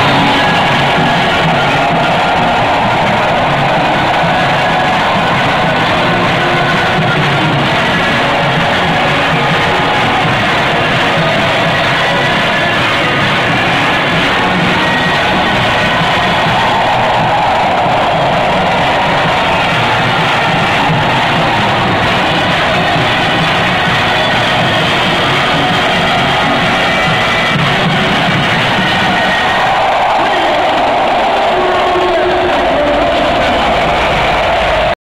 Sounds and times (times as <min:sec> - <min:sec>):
Music: 0:00.0 - 0:35.0
Speech: 0:30.0 - 0:34.9.